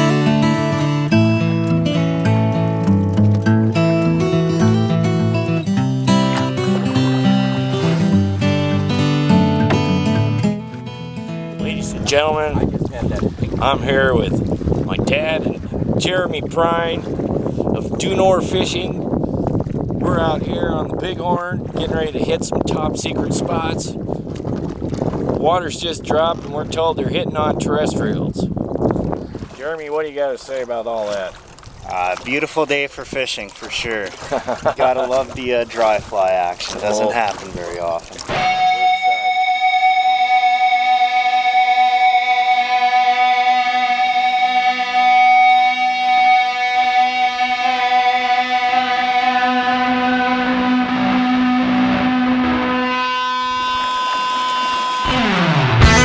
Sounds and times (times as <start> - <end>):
Wind noise (microphone): 11.7 - 29.8.